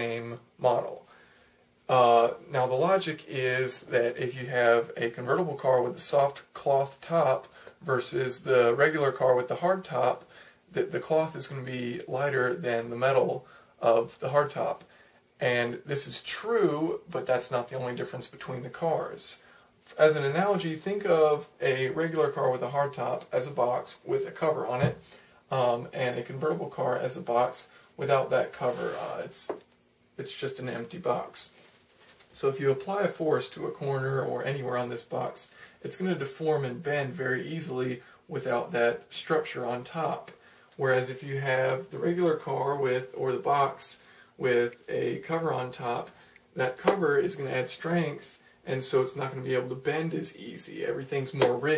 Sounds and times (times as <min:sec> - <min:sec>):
Speech: 0:00.0 - 0:01.1, 0:01.9 - 0:31.6, 0:32.3 - 0:51.7.